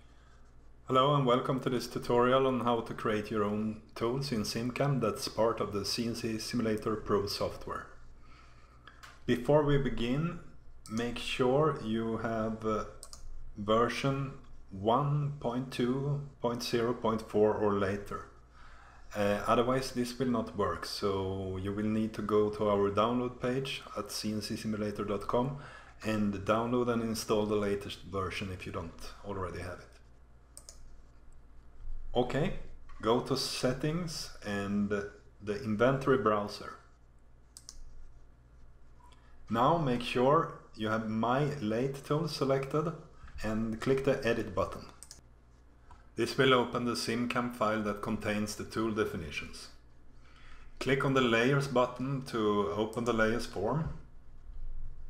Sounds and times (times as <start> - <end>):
Speech: 0.9 - 8.0, 9.2 - 18.4, 19.1 - 30.0, 32.1 - 36.9, 39.5 - 45.0, 46.2 - 49.8, 50.8 - 54.1.